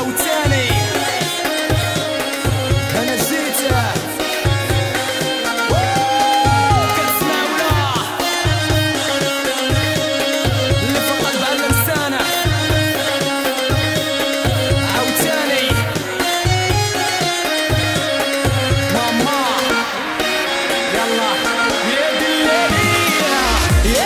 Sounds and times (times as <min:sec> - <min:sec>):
Music: 0:00.0 - 0:24.0.